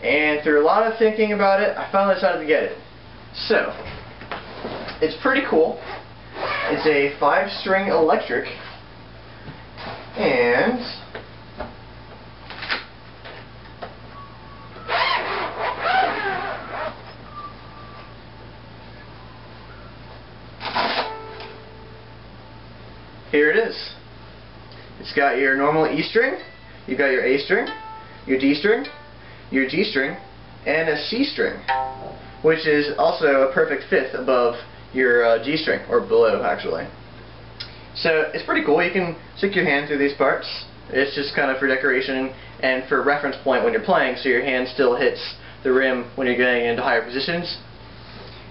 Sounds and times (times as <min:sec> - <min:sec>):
Speech: 0:00.0 - 0:02.8, 0:03.4 - 0:04.0, 0:05.0 - 0:05.9, 0:06.6 - 0:08.7, 0:10.2 - 0:11.2, 0:23.3 - 0:24.0, 0:25.0 - 0:27.7, 0:28.3 - 0:28.9, 0:29.5 - 0:31.7, 0:32.4 - 0:37.0, 0:38.0 - 0:47.7.